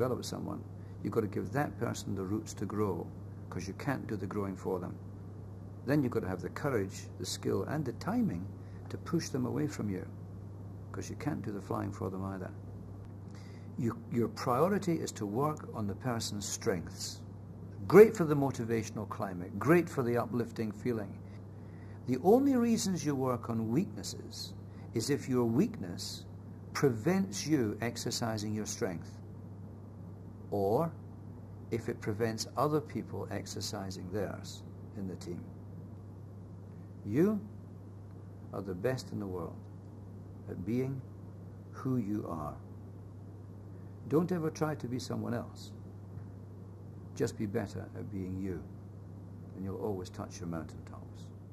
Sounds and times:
Speech: 0.0 - 5.0, 5.9 - 10.2, 10.9 - 12.6, 13.8 - 21.2, 22.0 - 29.2, 30.5 - 31.0, 31.8 - 35.6, 37.0 - 37.6, 38.5 - 39.6, 40.5 - 41.1, 41.8 - 42.7, 44.1 - 45.8, 47.2 - 48.7, 49.6 - 51.3.

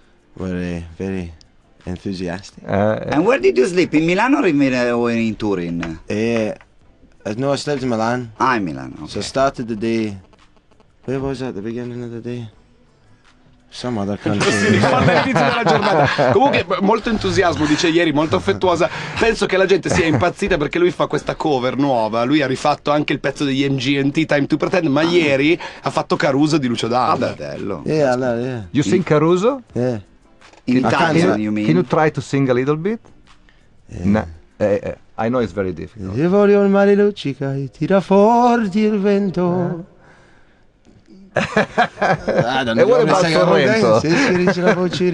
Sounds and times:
Speech: 0.4 - 6.6, 13.7 - 30.0, 30.7 - 33.0, 33.9 - 39.9, 42.3 - 45.1.

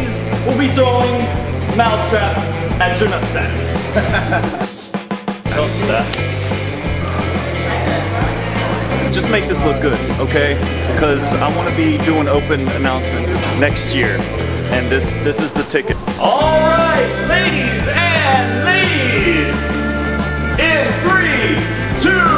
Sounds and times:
Speech: 0.0 - 3.9, 5.5 - 8.4, 9.0 - 19.8, 20.6 - 22.3
Music: 0.0 - 22.3.

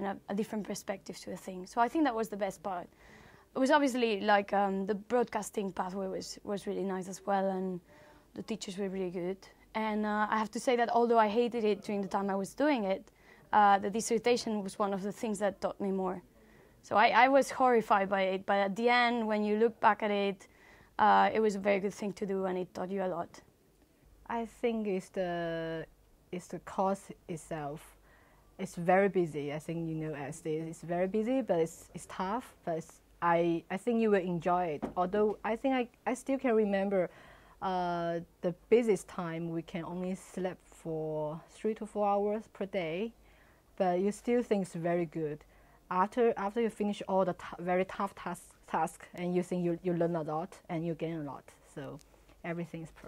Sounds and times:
Speech: 0.0 - 2.9, 3.6 - 23.5, 24.3 - 27.9, 28.6 - 43.2, 43.8 - 53.0.

